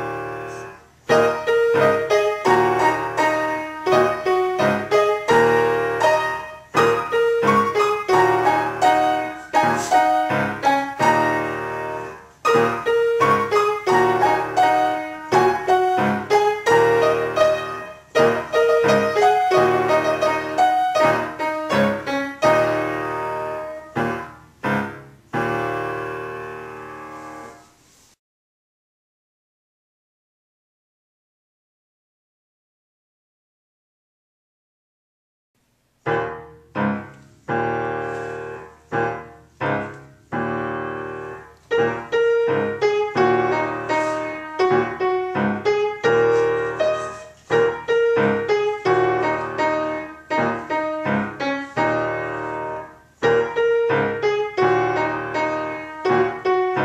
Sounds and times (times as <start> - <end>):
Music: 0.0 - 27.9, 36.0 - 56.8.